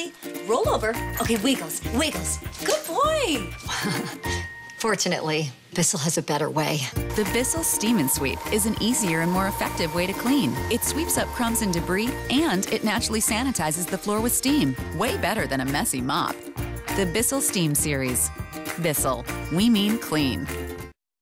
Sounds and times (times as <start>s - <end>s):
Music: 0.0s - 21.0s
Speech: 4.8s - 16.3s, 17.0s - 20.5s.